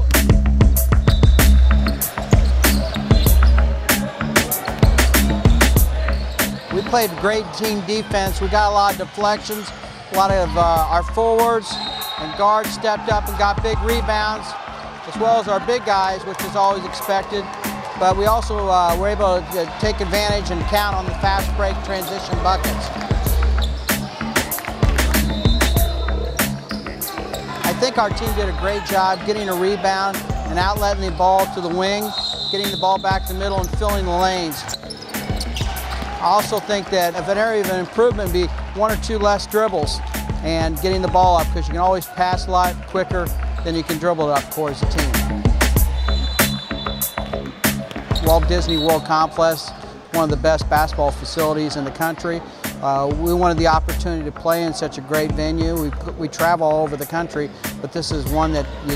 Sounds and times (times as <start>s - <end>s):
Music: 0.0s - 58.9s
Speech: 6.7s - 23.0s, 27.6s - 34.7s, 36.2s - 45.2s, 48.2s - 58.9s.